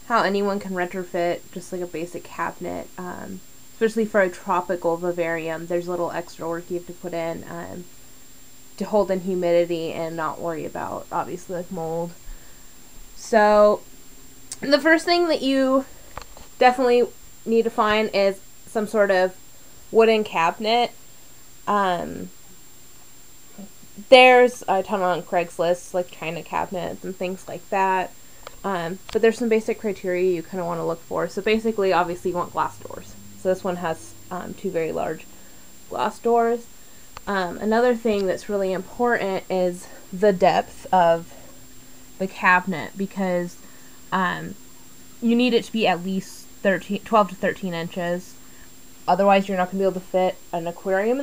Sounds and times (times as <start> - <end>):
Speech: 0.0 - 7.9, 8.8 - 12.2, 13.2 - 13.8, 14.5 - 15.9, 16.6 - 19.4, 20.0 - 21.0, 21.7 - 22.3, 24.0 - 35.3, 35.9 - 36.6, 37.2 - 41.4, 42.2 - 44.6, 45.2 - 48.4, 49.1 - 51.2.